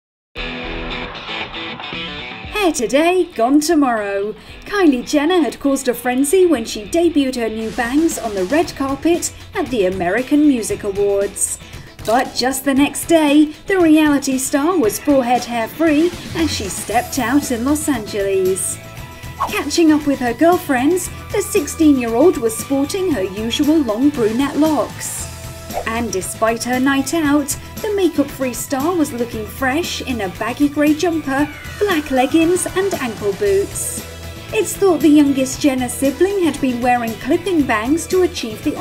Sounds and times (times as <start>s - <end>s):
Music: 0.4s - 38.8s
Speech: 2.5s - 18.8s, 19.4s - 38.8s.